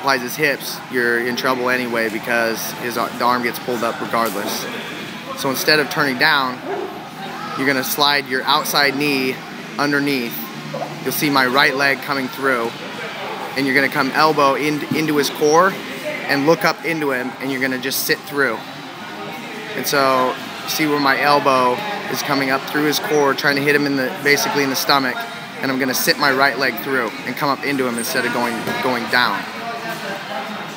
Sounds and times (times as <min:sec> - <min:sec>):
Speech: 0:00.0 - 0:04.7, 0:05.3 - 0:06.6, 0:07.6 - 0:12.8, 0:13.6 - 0:18.6, 0:19.8 - 0:30.7.